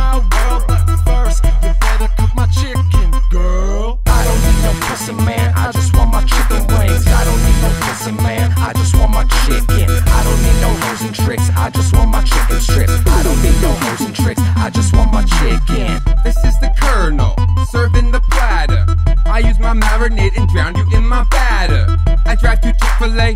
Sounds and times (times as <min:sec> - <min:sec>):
Hip hop music: 0:00.0 - 0:23.3.